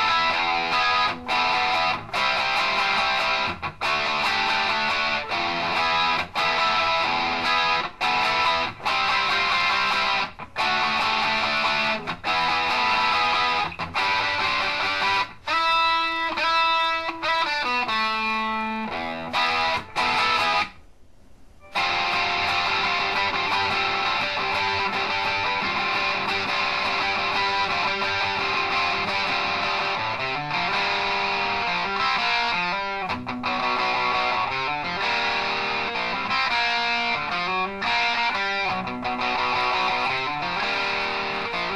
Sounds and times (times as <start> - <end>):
Bass guitar: 0.0 - 15.4, 21.7 - 41.7
Strum: 21.6 - 41.7.